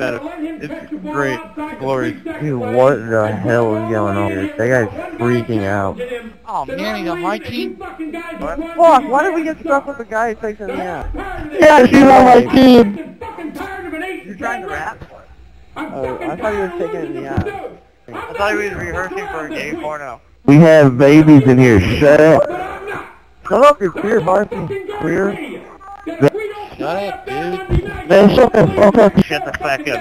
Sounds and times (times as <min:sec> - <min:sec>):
Conversation: 0:00.0 - 0:30.0
Male speech, man speaking: 0:00.0 - 0:30.0
Speech synthesizer: 0:00.0 - 0:30.0.